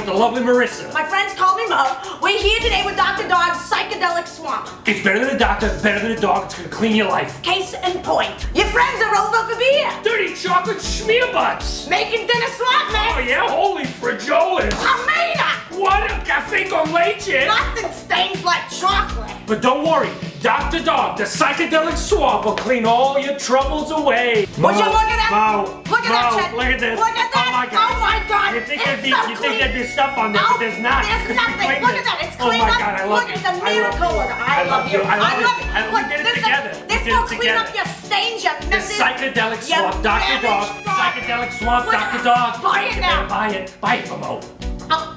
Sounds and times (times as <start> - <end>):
Speech: 0.0 - 44.4
Music: 0.0 - 45.1.